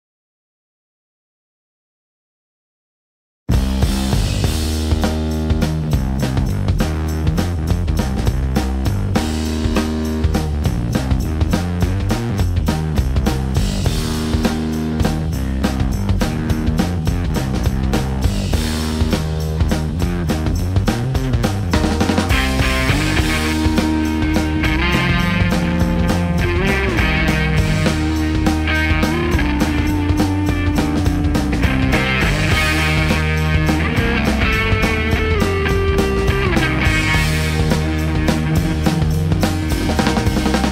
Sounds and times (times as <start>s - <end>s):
Music: 3.5s - 40.7s.